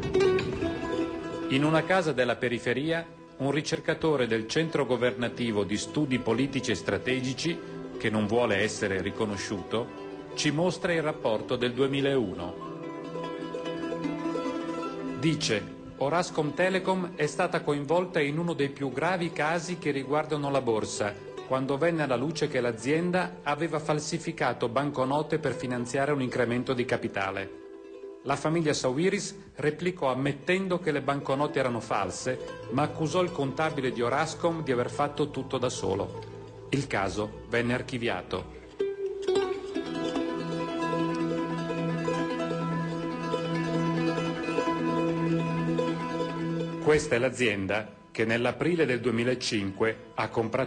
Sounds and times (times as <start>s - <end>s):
Music: 0.0s - 50.6s
Speech: 1.5s - 12.6s, 15.2s - 27.5s, 28.3s - 38.6s, 46.8s - 50.6s.